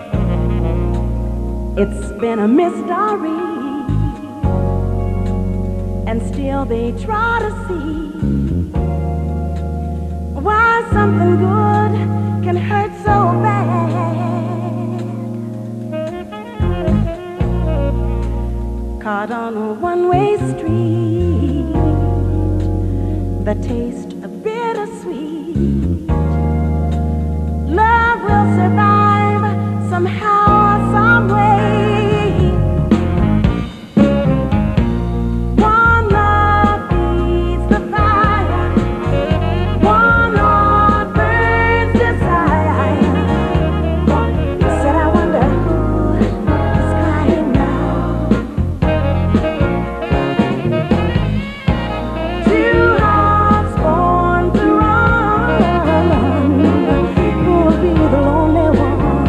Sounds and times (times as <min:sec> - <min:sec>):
Music: 0:00.0 - 0:59.2.